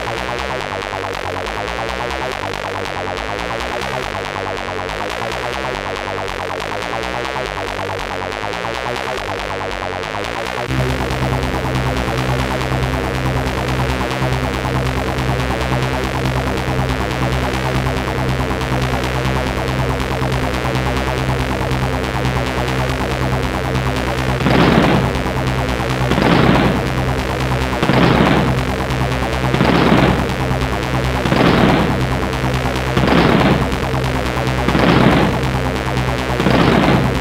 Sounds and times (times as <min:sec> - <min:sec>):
Techno: 0:00.0 - 0:37.2.